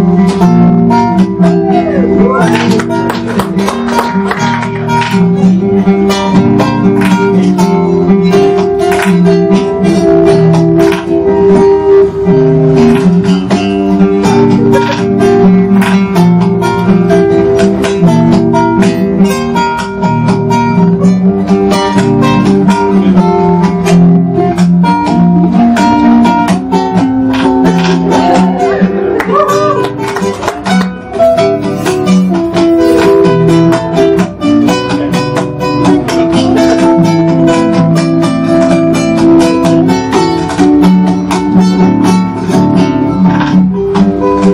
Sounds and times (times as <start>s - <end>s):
Acoustic guitar: 0.0s - 44.5s.